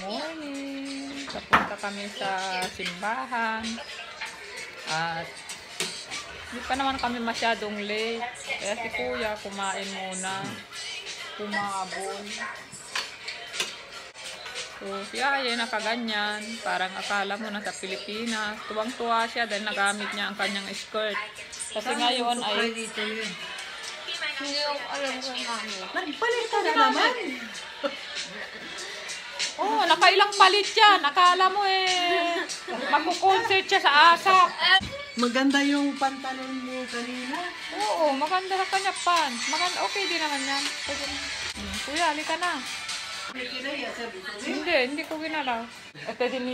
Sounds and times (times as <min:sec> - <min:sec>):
Music: 0:00.0 - 0:46.5.